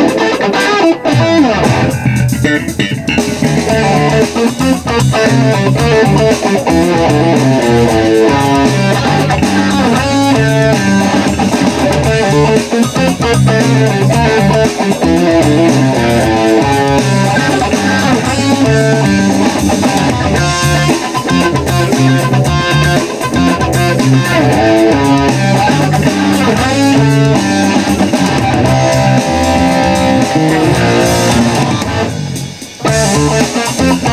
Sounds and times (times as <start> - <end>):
Electric guitar: 0.0 - 34.1.